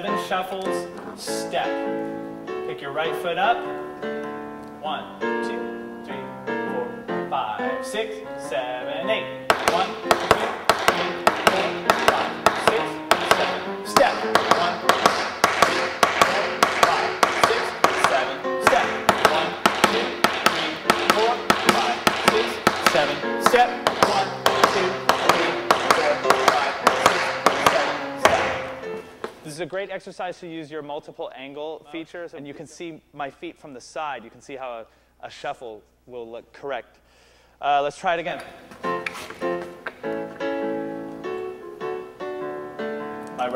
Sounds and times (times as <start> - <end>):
Speech: 0.0 - 1.9, 2.7 - 3.6, 4.8 - 14.8, 16.2 - 28.5, 29.4 - 37.0, 37.6 - 38.6
Music: 0.0 - 29.5, 38.6 - 43.5
Tap: 9.5 - 28.6.